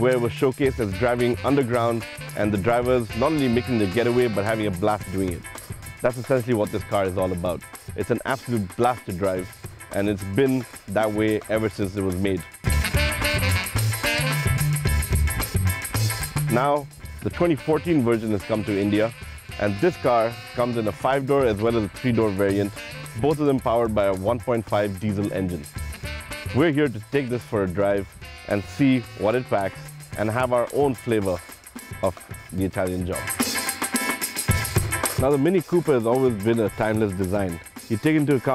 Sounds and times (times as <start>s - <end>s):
Speech: 0.0s - 5.4s, 6.0s - 12.5s, 16.5s - 25.7s, 26.6s - 31.4s, 32.0s - 33.3s, 35.2s - 38.5s
Music: 0.0s - 38.5s.